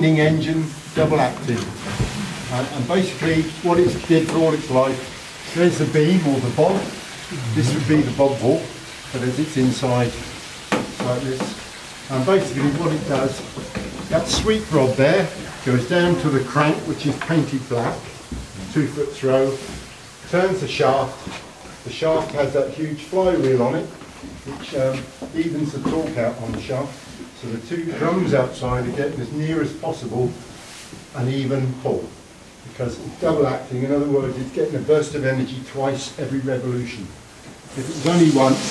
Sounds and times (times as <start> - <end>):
Speech: 0.0 - 1.7, 2.5 - 10.3, 11.0 - 30.5, 31.1 - 38.7.